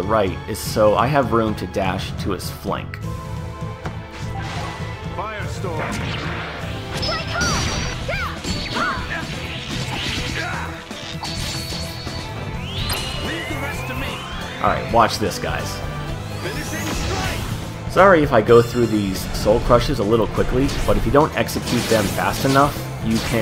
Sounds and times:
Music: 0.0s - 23.4s
Smash, crash: 5.8s - 12.2s, 19.7s - 23.4s.

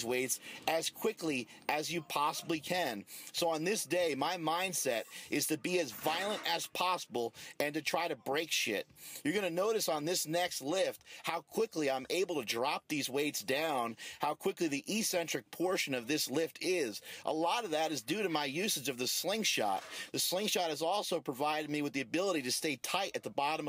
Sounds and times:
Speech: 0.0s - 23.6s.

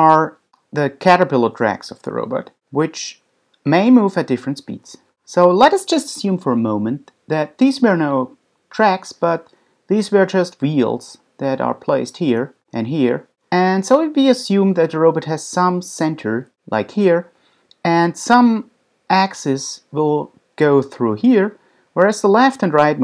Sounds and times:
Speech: 0.0s - 23.0s.

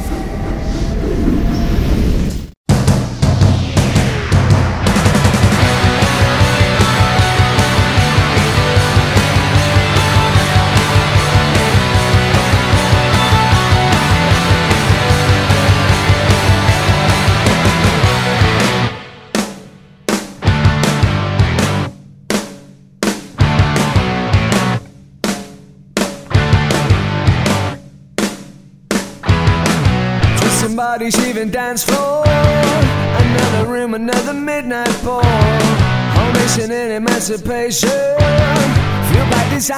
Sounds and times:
Music: 2.7s - 39.7s.

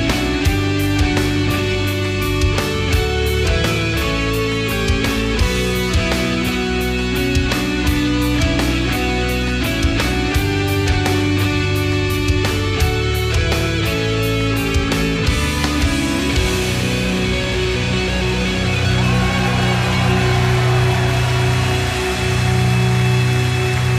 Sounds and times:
Progressive rock: 0.0s - 23.9s.

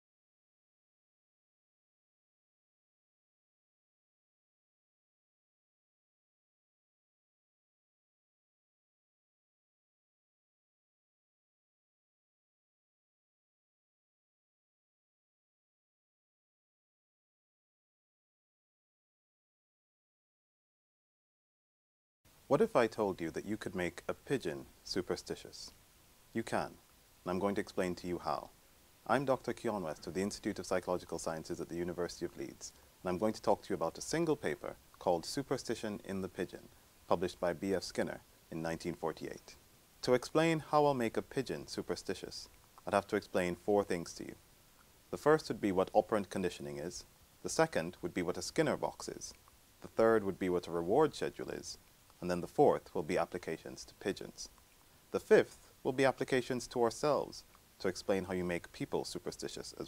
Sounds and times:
Speech: 22.5s - 44.4s, 45.1s - 54.5s, 55.2s - 59.8s.

